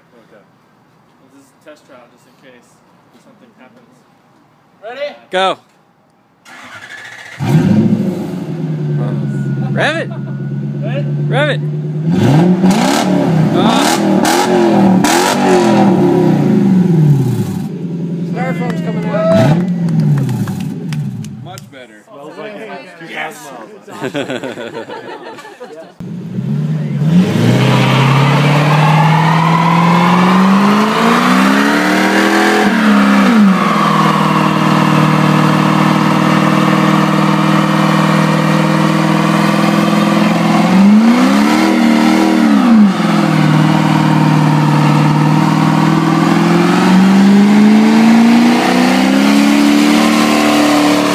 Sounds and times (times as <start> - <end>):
Medium engine (mid frequency): 6.4 - 21.5, 26.0 - 51.1.